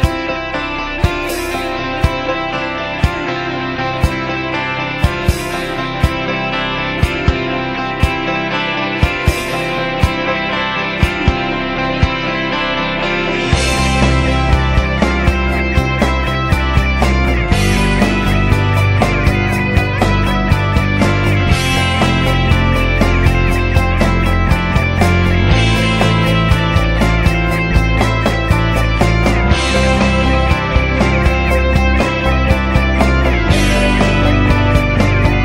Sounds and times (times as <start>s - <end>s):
Music: 0.0s - 35.4s.